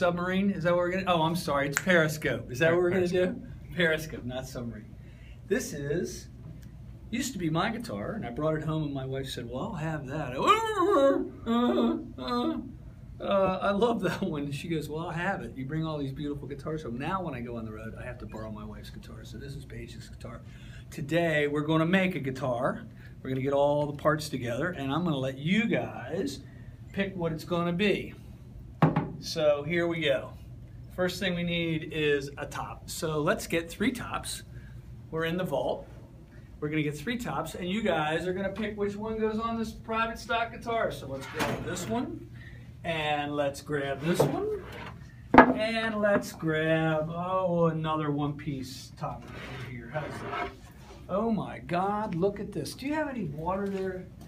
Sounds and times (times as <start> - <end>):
Speech: 0.0 - 4.9, 5.5 - 6.4, 7.1 - 28.2, 29.2 - 34.5, 35.1 - 35.9, 36.6 - 44.8, 45.4 - 54.2.